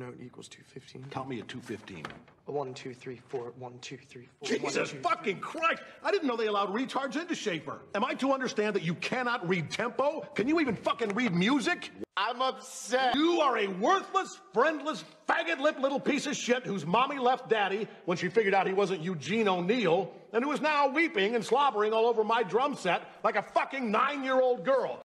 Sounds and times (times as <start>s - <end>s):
Speech: 0.0s - 25.0s.